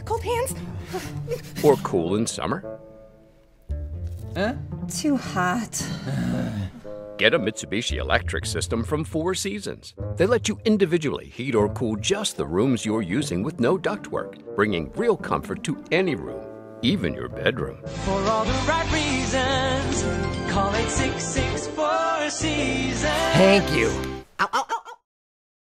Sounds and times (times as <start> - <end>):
Music: 0.0 - 24.3
Speech: 7.2 - 17.8, 23.3 - 24.0.